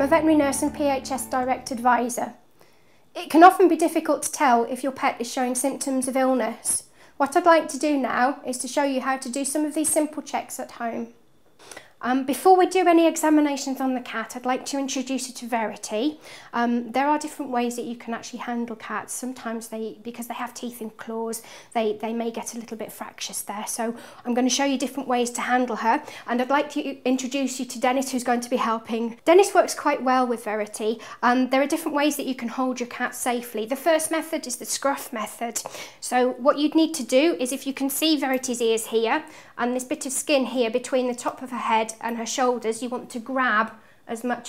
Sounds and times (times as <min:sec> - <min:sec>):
Speech: 0:00.0 - 0:02.4, 0:03.2 - 0:11.2, 0:12.0 - 0:44.4.